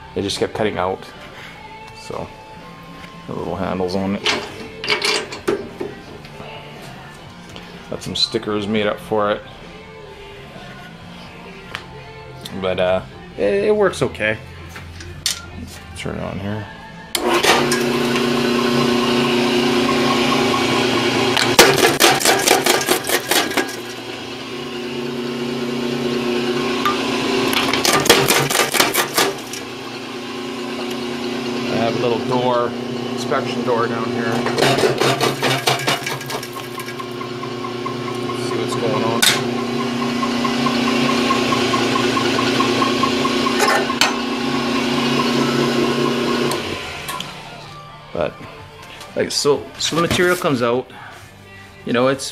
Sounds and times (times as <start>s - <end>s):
Music: 0.0s - 52.3s
Speech: 0.2s - 1.1s, 3.3s - 4.2s, 7.9s - 9.4s, 12.5s - 14.4s, 31.7s - 34.4s, 38.4s - 39.3s, 49.2s - 50.9s, 51.8s - 52.3s.